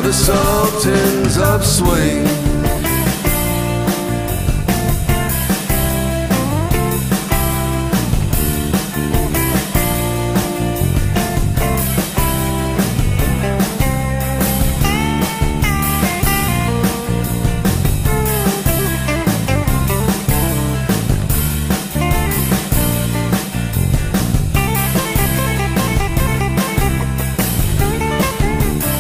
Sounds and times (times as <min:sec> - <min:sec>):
Psychedelic rock: 0:00.0 - 0:29.0.